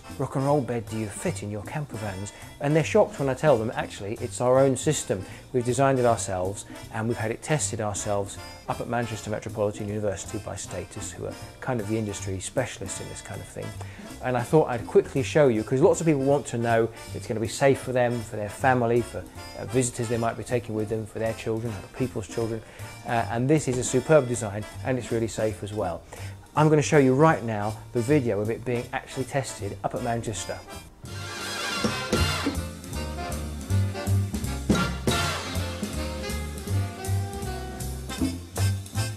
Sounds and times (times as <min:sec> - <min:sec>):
Speech: 0:00.0 - 0:30.7.